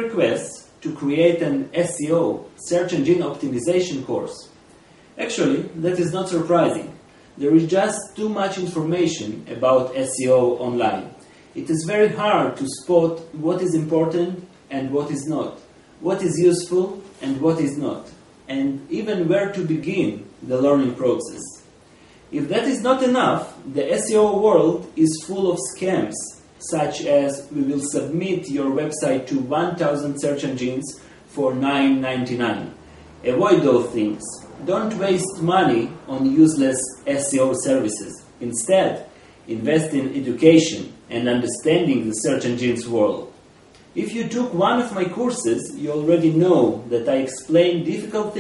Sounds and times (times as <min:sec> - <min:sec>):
Speech: 0:00.0 - 0:04.6, 0:05.2 - 0:21.7, 0:22.3 - 0:43.4, 0:44.0 - 0:48.4.